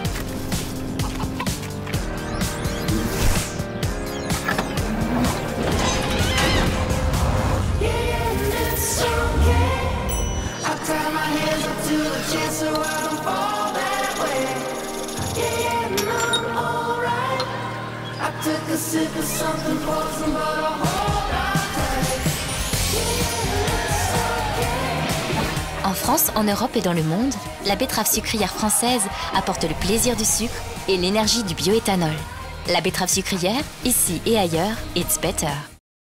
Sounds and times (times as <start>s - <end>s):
Music: 0.0s - 35.8s
Speech: 25.8s - 35.8s.